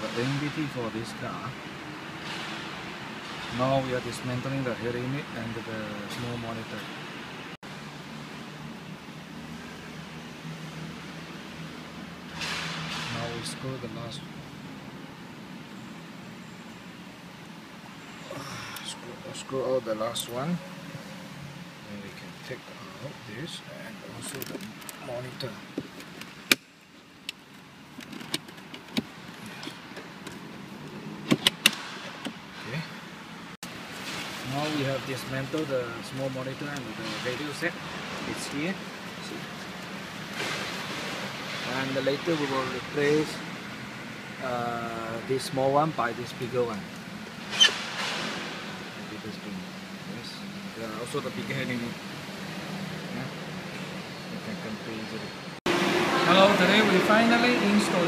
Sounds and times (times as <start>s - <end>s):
Speech: 0.0s - 1.6s, 3.5s - 6.9s, 13.1s - 14.3s, 18.8s - 20.6s, 21.8s - 25.6s, 34.4s - 39.5s, 41.6s - 43.4s, 44.4s - 46.9s, 49.1s - 52.0s, 54.3s - 55.4s, 56.2s - 58.0s.